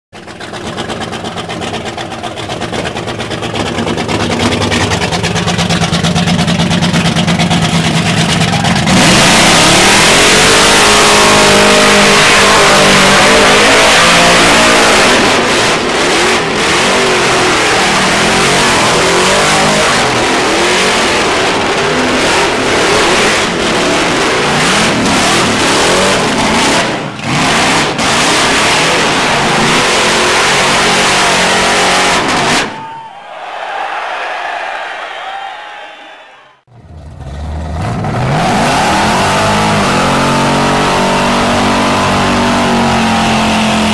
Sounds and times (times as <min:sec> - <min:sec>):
Crowd: 0:01.9 - 0:36.7, 0:41.4 - 0:43.9.